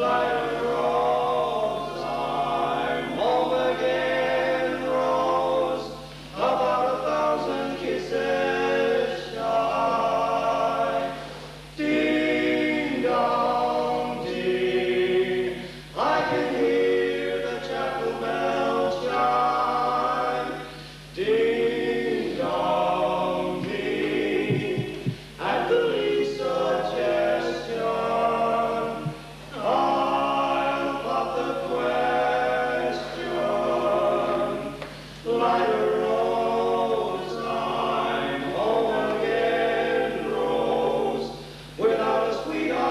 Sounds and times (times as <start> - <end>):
Music: 0.0 - 42.9.